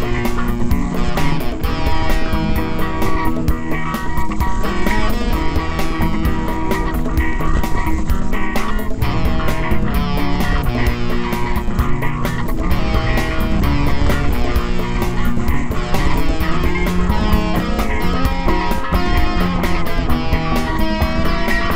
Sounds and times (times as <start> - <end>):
Motorcycle: 0.0 - 21.7.